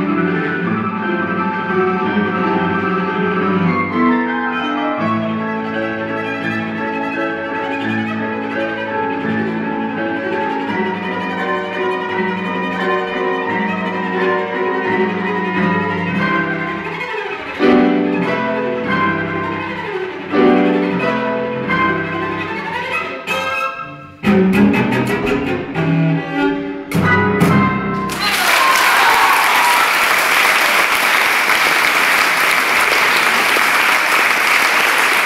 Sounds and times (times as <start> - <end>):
Cello: 0.0 - 28.0
Piano: 0.0 - 35.2.